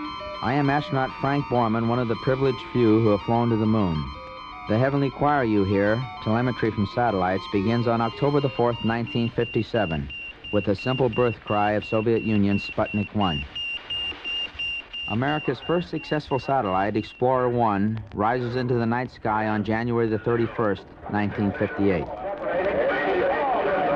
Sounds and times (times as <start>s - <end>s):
Beep, bleep: 0.1s - 17.6s
Speech: 0.4s - 4.1s, 4.7s - 13.5s, 15.1s - 23.9s.